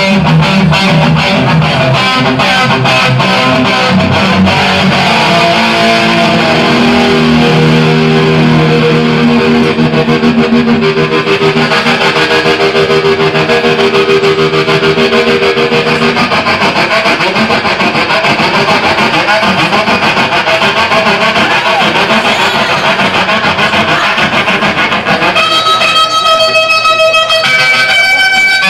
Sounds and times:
Electric guitar: 0.0 - 28.7
Strum: 0.0 - 28.7.

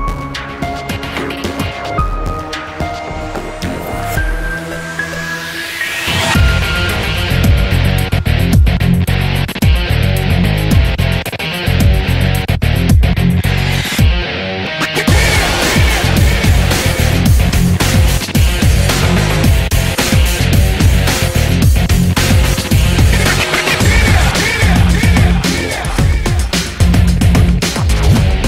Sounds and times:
Dance music: 0.0 - 9.9, 14.8 - 28.4
Background music: 0.0 - 28.4.

